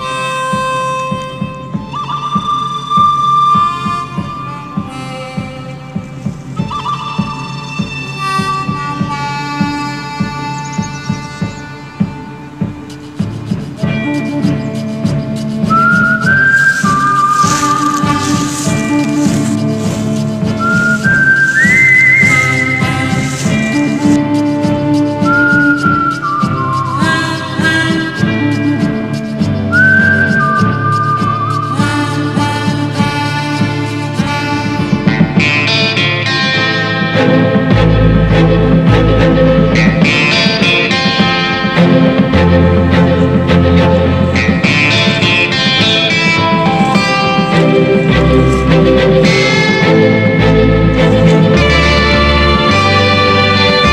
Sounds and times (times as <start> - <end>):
Blues: 0.0 - 53.9.